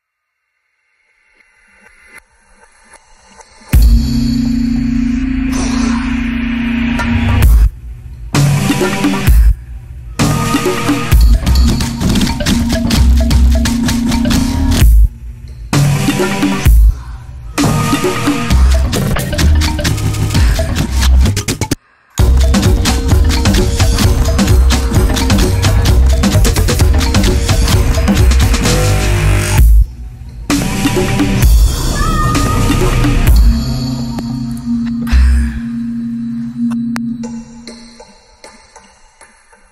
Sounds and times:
Music: 0.0 - 39.7.

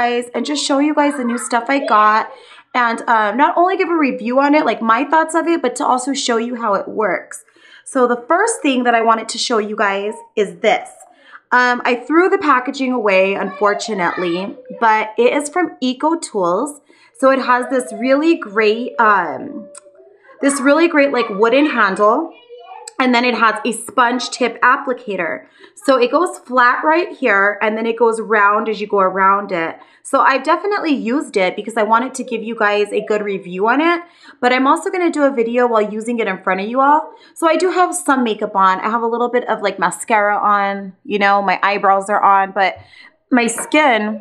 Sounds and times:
Speech: 0.0 - 44.2.

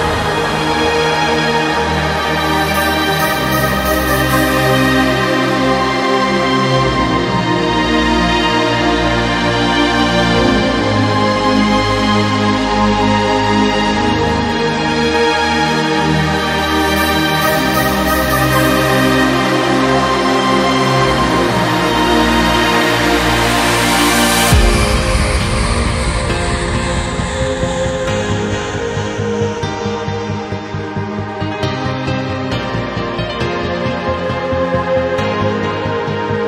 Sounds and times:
Trance music: 0.0 - 36.4.

